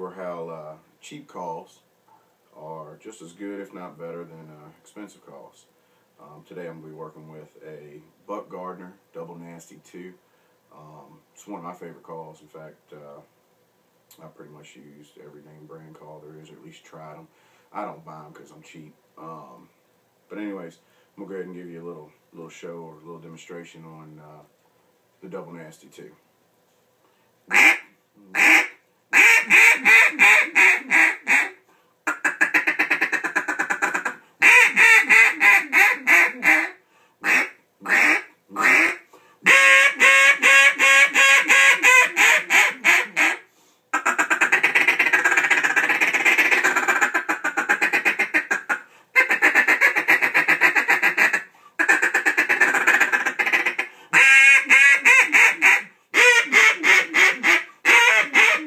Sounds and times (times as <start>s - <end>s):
Speech: 0.0s - 1.9s, 2.6s - 13.3s, 14.1s - 19.7s, 20.3s - 24.5s, 25.2s - 26.2s
Quack: 27.5s - 27.8s, 28.4s - 43.4s, 44.0s - 58.6s.